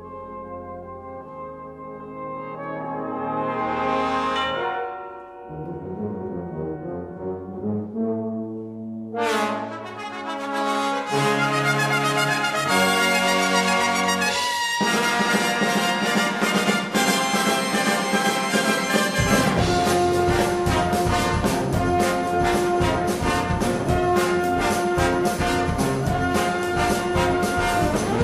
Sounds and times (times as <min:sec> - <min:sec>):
Brass instrument: 0:00.0 - 0:28.2.